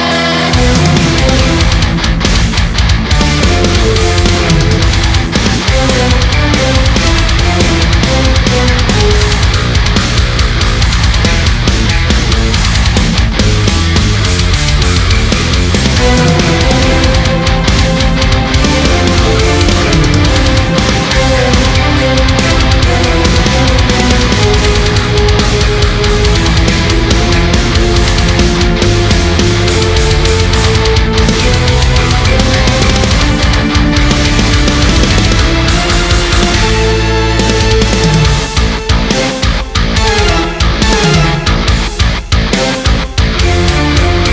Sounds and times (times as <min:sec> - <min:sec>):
Electric guitar: 0:00.0 - 0:44.3.